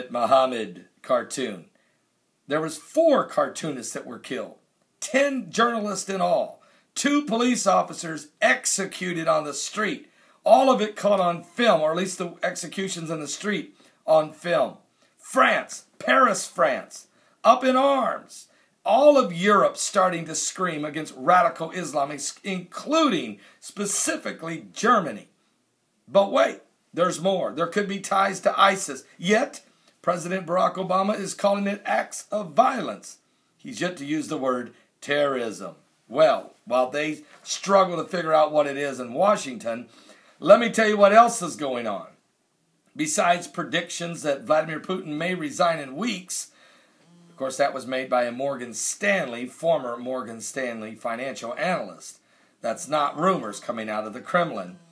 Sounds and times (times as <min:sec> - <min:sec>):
Speech: 0:00.0 - 0:01.8, 0:02.5 - 0:25.4, 0:26.1 - 0:42.2, 0:43.0 - 0:46.6, 0:47.4 - 0:54.8.